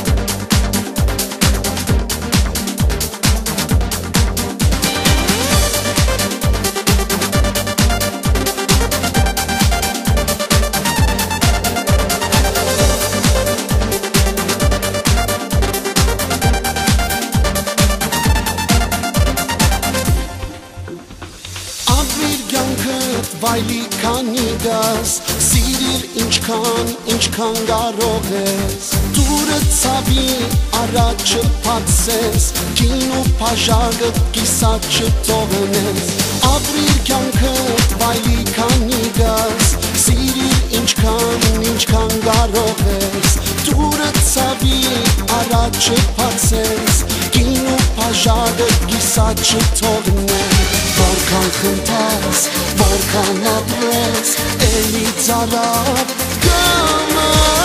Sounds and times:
Music: 0.0s - 57.6s.

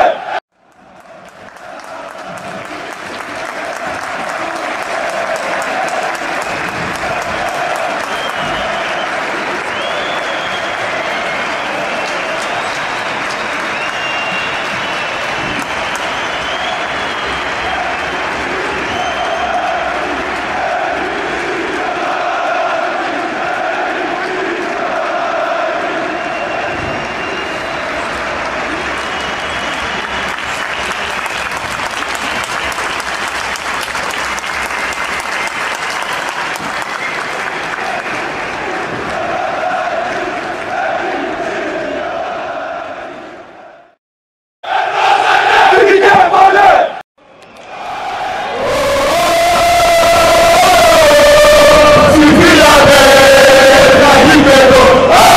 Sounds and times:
Crowd: 0.0s - 44.0s, 44.6s - 55.3s
Applause: 0.6s - 41.7s.

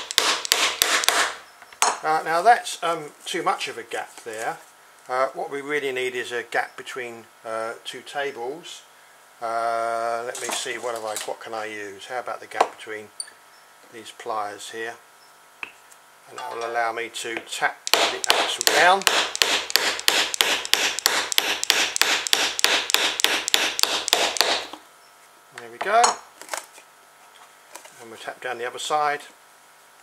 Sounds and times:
Speech: 2.0s - 13.1s, 13.9s - 15.0s, 16.3s - 19.0s, 25.5s - 26.2s, 28.0s - 29.4s.

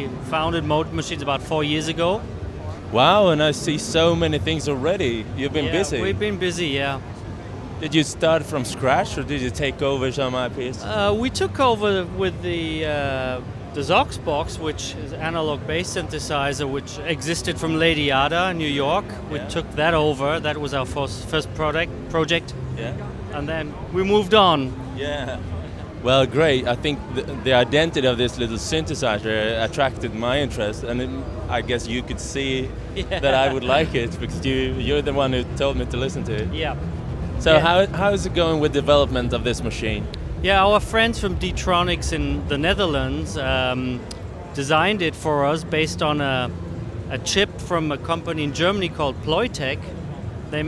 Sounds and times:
Speech: 0.0s - 2.2s, 2.8s - 7.0s, 7.8s - 36.8s, 37.4s - 46.5s, 47.1s - 49.9s, 50.5s - 50.6s.

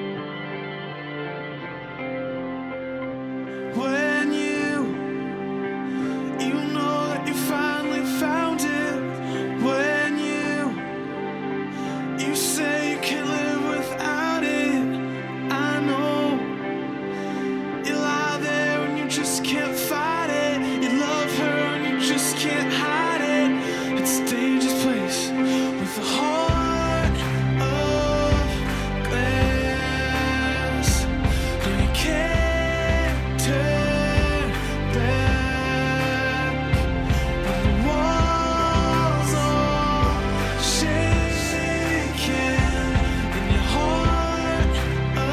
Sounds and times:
Music: 0.0s - 45.3s.

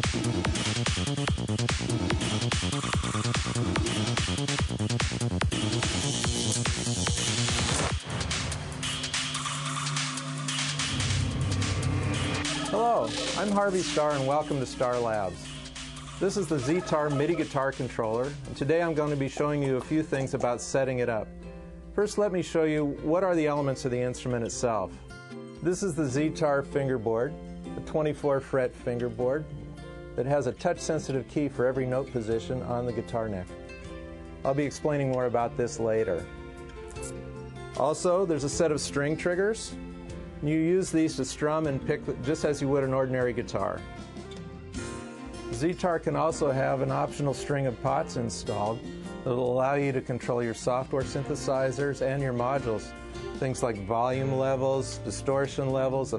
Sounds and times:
Music: 0.0s - 56.1s
Speech: 12.5s - 15.5s, 16.2s - 21.3s, 22.0s - 24.9s, 25.6s - 29.4s, 30.2s - 33.5s, 34.4s - 36.3s, 37.8s - 39.8s, 40.4s - 43.8s, 45.6s - 56.1s.

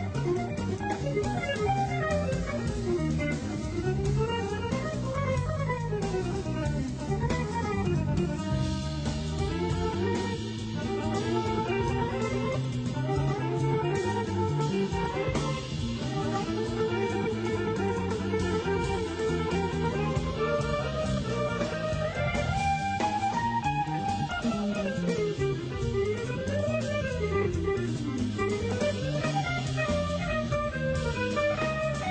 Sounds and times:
Blues: 0.0s - 32.1s
Guitar: 0.0s - 32.1s.

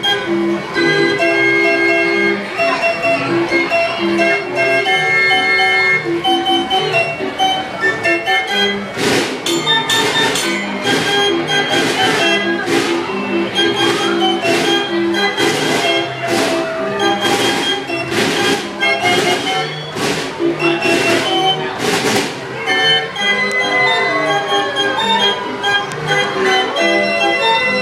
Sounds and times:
Inside, public space: 0.0s - 27.8s
Music: 0.0s - 27.8s.

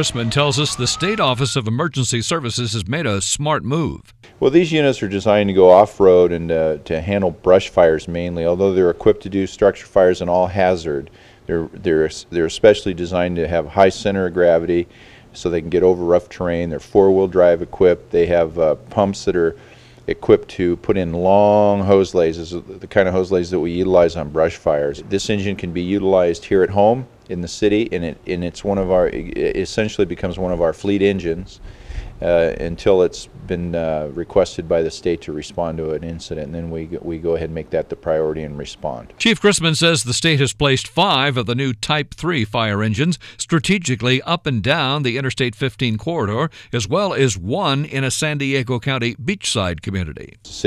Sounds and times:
Speech: 0.0s - 31.6s, 32.2s - 50.6s.

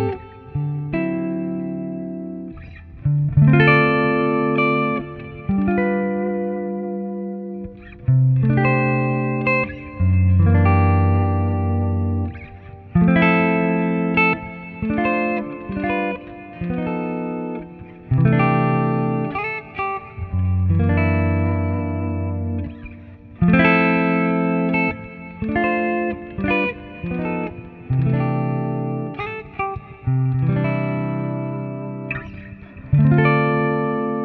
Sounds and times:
Electric guitar: 0.0s - 34.2s.

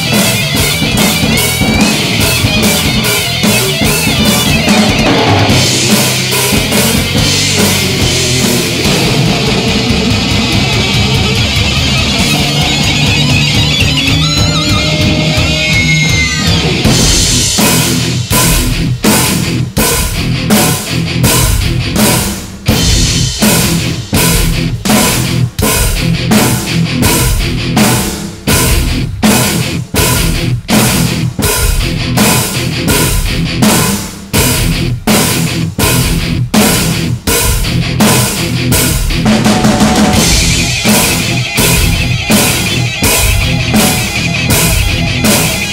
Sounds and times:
Drum: 0.0s - 45.7s
Drum kit: 0.0s - 45.7s.

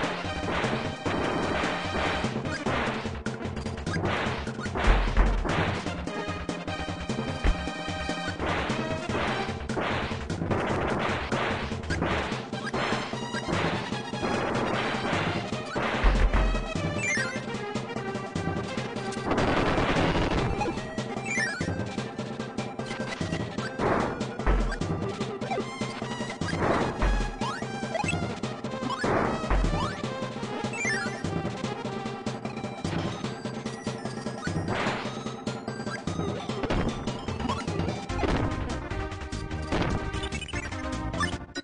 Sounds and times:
Music: 0.0s - 41.6s.

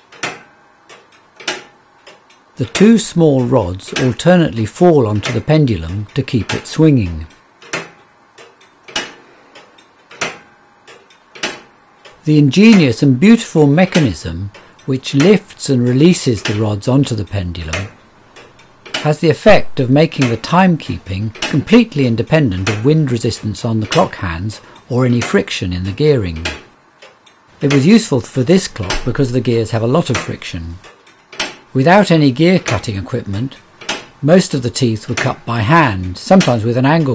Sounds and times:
Speech: 2.6s - 7.4s, 12.2s - 18.0s, 19.0s - 26.6s, 27.6s - 30.8s, 31.8s - 33.6s, 34.2s - 37.1s.

